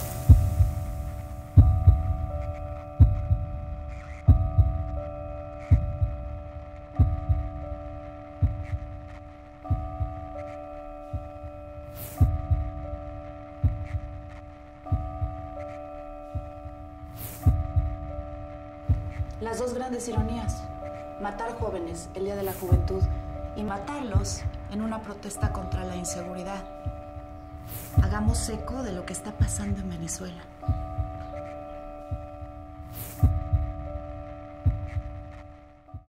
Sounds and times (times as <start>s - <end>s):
Music: 0.0s - 36.1s
Speech: 19.4s - 26.7s, 28.0s - 30.5s.